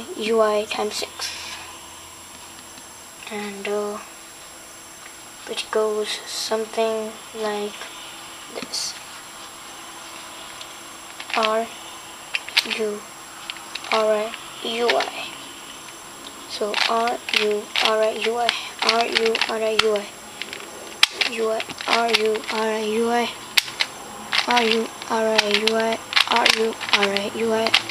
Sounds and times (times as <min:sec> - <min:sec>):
Speech: 0:00.0 - 0:01.6, 0:03.2 - 0:04.1, 0:05.5 - 0:07.9, 0:08.5 - 0:09.0, 0:11.4 - 0:11.7, 0:12.6 - 0:13.0, 0:13.9 - 0:15.4, 0:16.5 - 0:20.1, 0:21.2 - 0:23.4, 0:24.4 - 0:27.9
Inside, small room: 0:00.0 - 0:27.9.